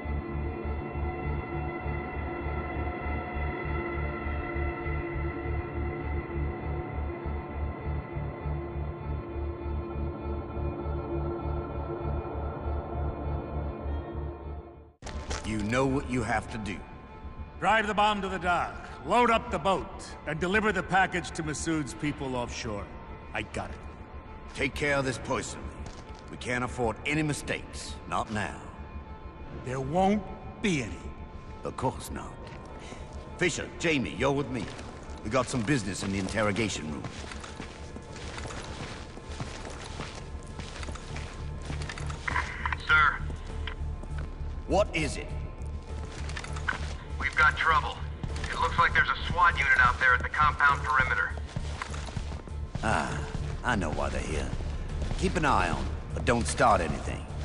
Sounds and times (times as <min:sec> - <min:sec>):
Speech: 0:26.3 - 0:28.7, 0:47.2 - 0:51.4, 0:52.8 - 0:54.6, 0:55.2 - 0:57.3.